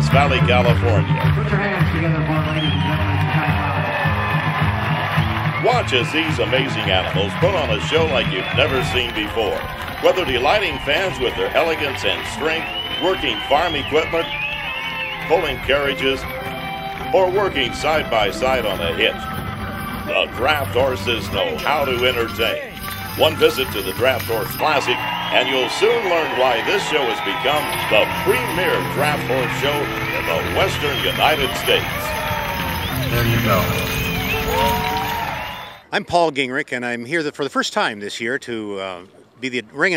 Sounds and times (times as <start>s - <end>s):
Speech: 0.0s - 2.7s, 5.6s - 14.3s, 15.3s - 16.2s, 17.1s - 19.2s, 20.1s - 31.8s, 35.9s - 39.9s
Music: 0.0s - 35.8s
Clip-clop: 4.8s - 35.8s.